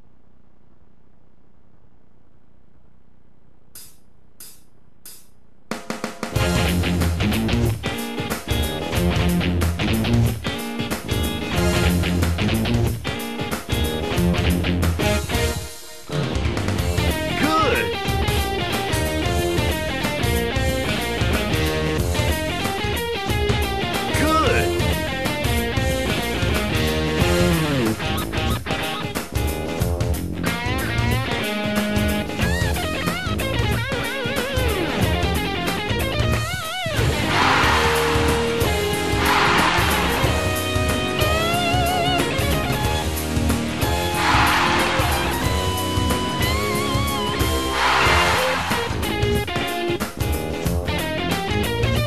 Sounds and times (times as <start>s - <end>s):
Electric guitar: 6.4s - 52.0s
Speech: 17.3s - 18.0s, 24.1s - 24.9s.